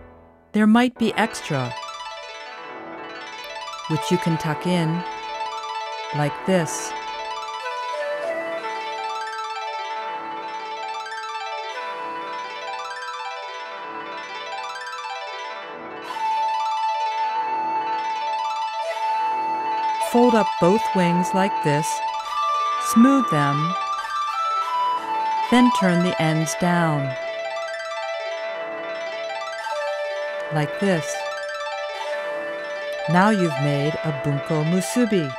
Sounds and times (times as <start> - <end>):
Music: 0.0 - 35.3
Speech: 0.6 - 1.8, 3.9 - 5.1, 6.2 - 6.9, 20.1 - 22.0, 22.8 - 23.8, 25.5 - 27.2, 30.5 - 31.2, 33.0 - 35.3.